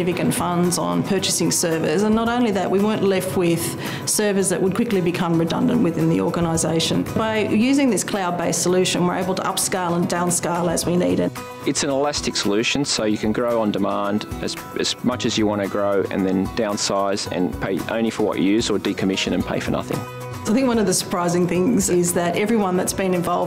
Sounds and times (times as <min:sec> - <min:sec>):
Music: 0:00.0 - 0:23.4
Speech: 0:00.0 - 0:23.4.